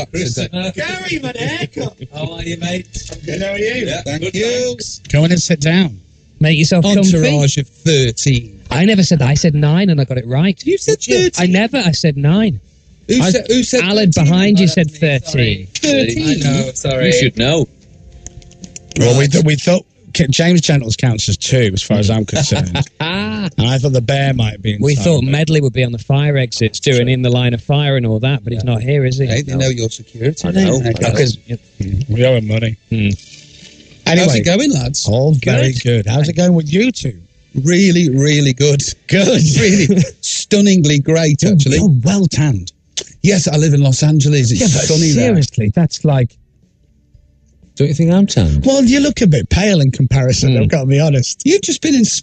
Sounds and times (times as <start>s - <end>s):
Radio: 0.0s - 5.2s, 6.5s - 7.5s, 11.0s - 17.5s, 21.1s - 25.3s, 28.1s - 32.4s, 34.1s - 36.2s, 44.5s - 45.5s, 48.3s - 48.9s
Speech: 0.0s - 17.7s, 19.0s - 33.2s, 34.1s - 46.4s, 47.8s - 52.2s.